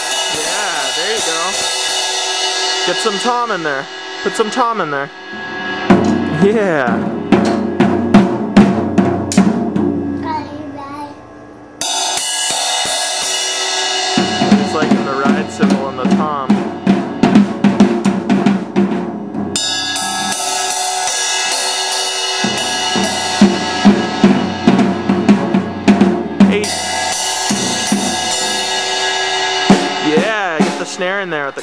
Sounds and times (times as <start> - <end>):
Speech: 0.4 - 1.6, 2.9 - 5.1, 6.3 - 7.0, 14.6 - 16.5, 26.5 - 26.8, 30.0 - 31.6.